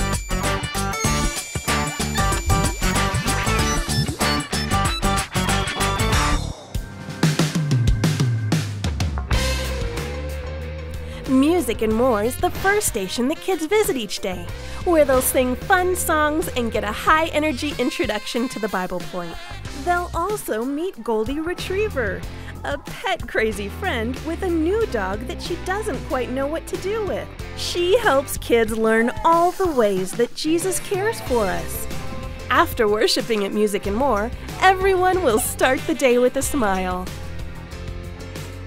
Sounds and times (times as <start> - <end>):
Music: 0.0 - 38.6
Speech: 11.3 - 31.9, 32.5 - 37.1.